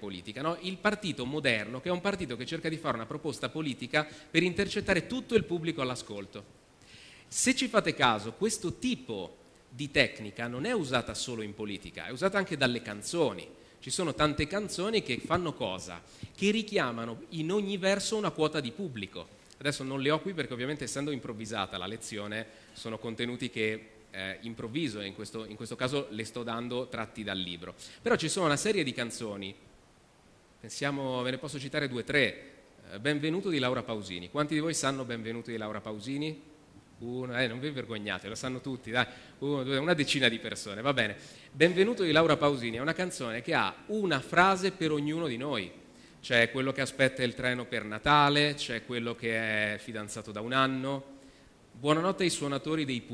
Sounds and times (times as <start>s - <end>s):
Male speech, man speaking: 0.0s - 6.5s, 7.4s - 29.6s, 30.6s - 36.4s, 37.0s - 51.1s, 51.8s - 53.1s
Narration, monologue: 0.0s - 53.1s.